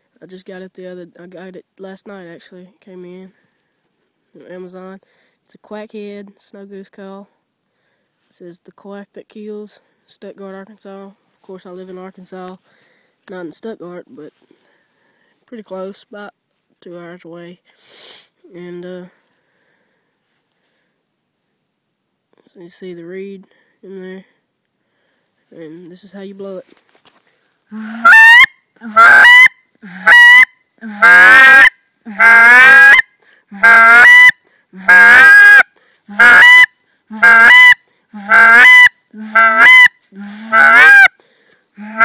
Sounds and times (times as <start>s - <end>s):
Outside, rural or natural: 0.0s - 42.0s.